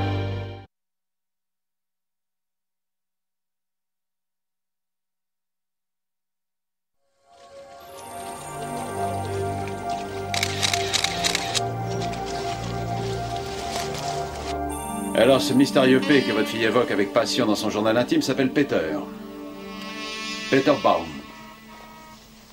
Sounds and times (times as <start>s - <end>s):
Music: 0.0s - 0.7s, 7.1s - 22.5s
Speech: 15.2s - 19.1s, 20.5s - 21.2s.